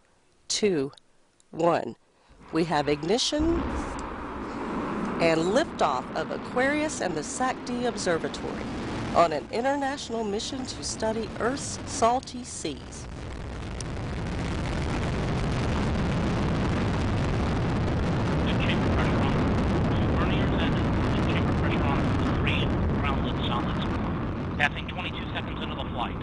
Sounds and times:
Speech: 0:00.5 - 0:01.0, 0:01.6 - 0:02.0, 0:02.6 - 0:03.7, 0:05.2 - 0:08.6, 0:09.2 - 0:13.0, 0:18.5 - 0:23.9, 0:24.6 - 0:26.2
Eruption: 0:02.2 - 0:26.2.

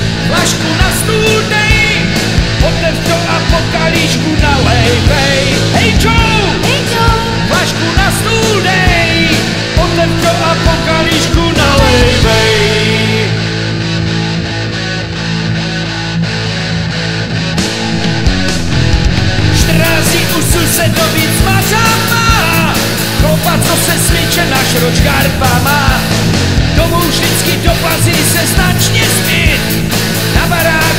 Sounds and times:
Music: 0:00.0 - 0:30.9.

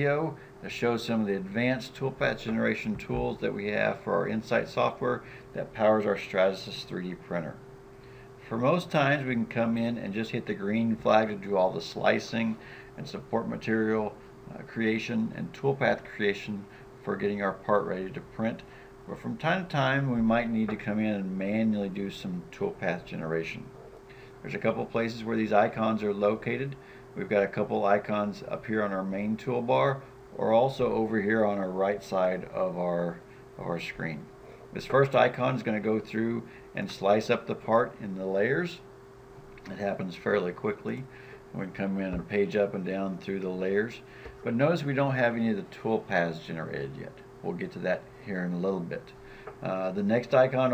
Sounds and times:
Speech: 0:00.0 - 0:07.6, 0:08.4 - 0:23.7, 0:24.4 - 0:38.9, 0:39.6 - 0:50.7.

